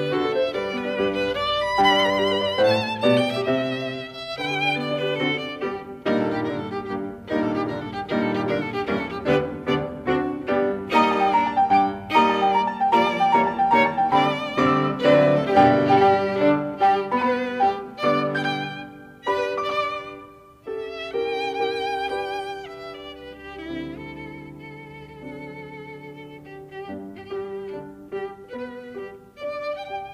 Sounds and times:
Classical music: 0.0 - 30.1
Piano: 0.0 - 30.1
Violin, fiddle: 0.0 - 30.1.

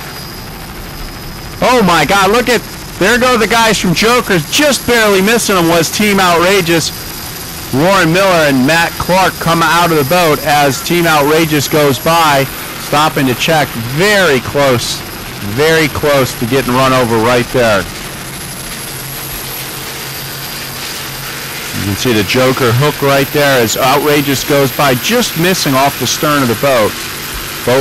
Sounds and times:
Speech: 1.6 - 6.9, 7.8 - 17.9, 21.8 - 27.0.

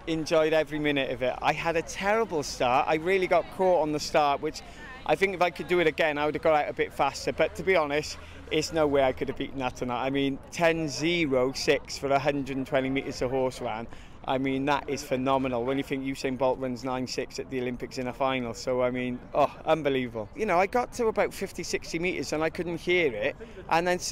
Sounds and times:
Speech: 0.0 - 24.1.

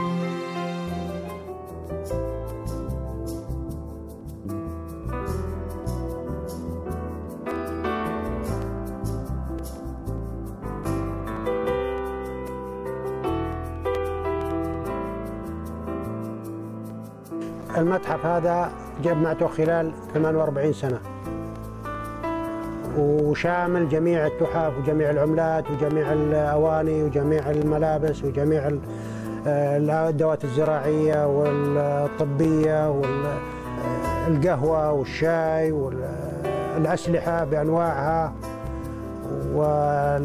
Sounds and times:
Music: 0.0 - 40.2
Speech: 17.7 - 21.1, 22.9 - 38.4, 39.3 - 40.2.

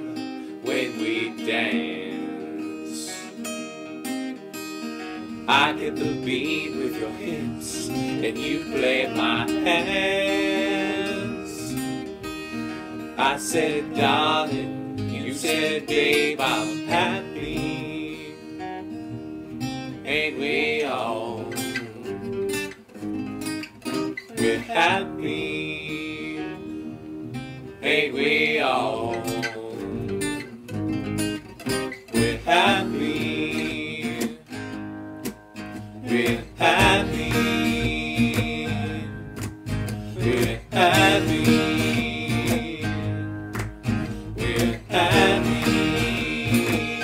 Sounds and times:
Music: 0.0 - 47.0.

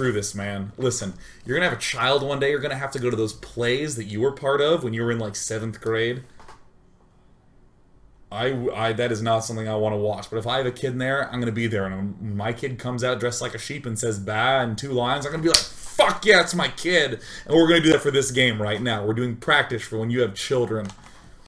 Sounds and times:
Speech: 0.0 - 6.3, 8.3 - 21.0.

